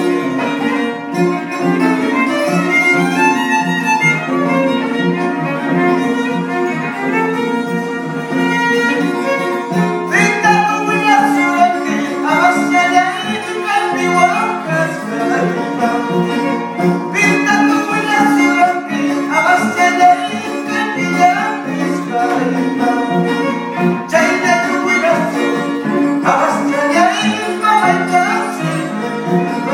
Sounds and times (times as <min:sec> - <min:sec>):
Violin, fiddle: 0:00.0 - 0:29.7.